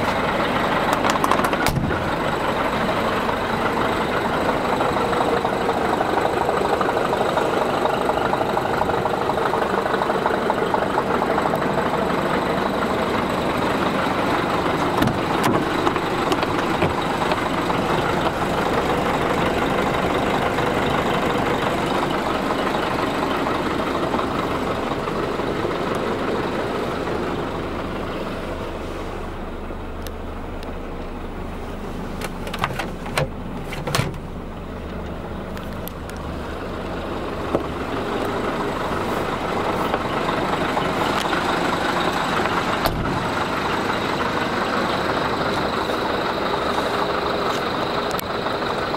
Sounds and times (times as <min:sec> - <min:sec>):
Truck: 0:00.0 - 0:48.9.